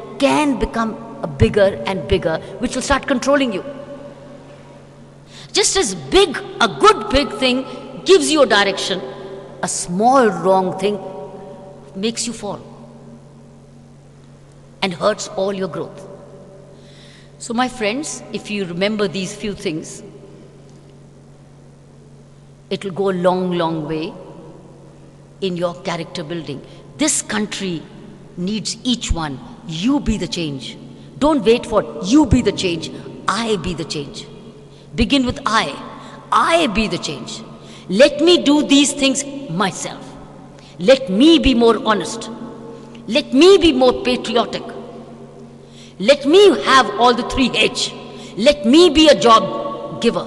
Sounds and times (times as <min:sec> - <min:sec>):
Female speech, woman speaking: 0:00.0 - 0:03.7, 0:05.6 - 0:09.0, 0:09.6 - 0:11.1, 0:12.0 - 0:12.6, 0:14.8 - 0:16.0, 0:17.4 - 0:20.0, 0:22.7 - 0:24.2, 0:25.4 - 0:34.3, 0:35.0 - 0:40.2, 0:40.8 - 0:42.3, 0:43.1 - 0:44.8, 0:46.0 - 0:50.2
Narration, monologue: 0:00.0 - 0:50.2.